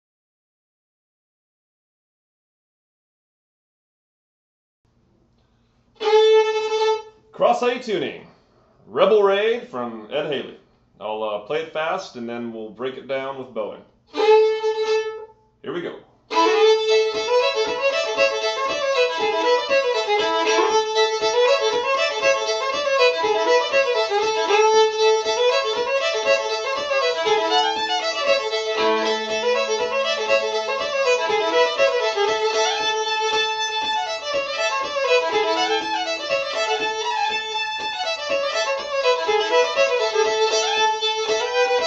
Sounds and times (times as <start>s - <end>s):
Violin, fiddle: 6.0s - 7.2s, 14.1s - 15.4s, 16.3s - 41.8s.